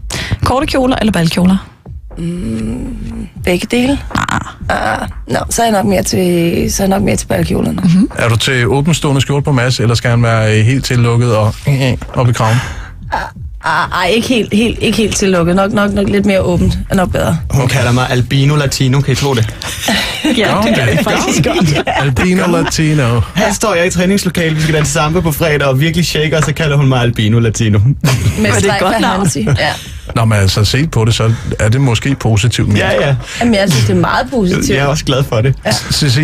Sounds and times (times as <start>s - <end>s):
Music: 0.0s - 36.2s
Speech: 4.7s - 19.5s, 20.3s - 36.2s.